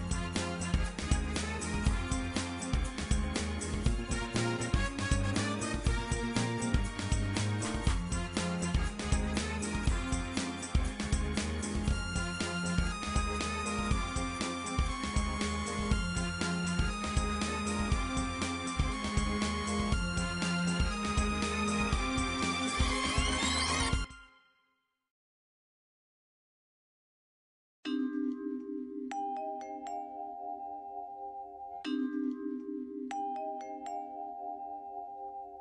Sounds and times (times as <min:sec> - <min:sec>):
Music: 0:00.0 - 0:25.1, 0:27.9 - 0:35.6.